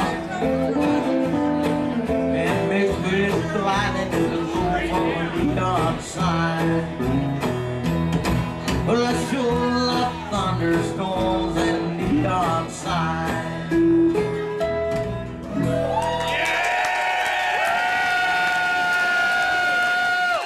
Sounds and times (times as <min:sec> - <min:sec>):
Singing: 0:08.8 - 0:13.8.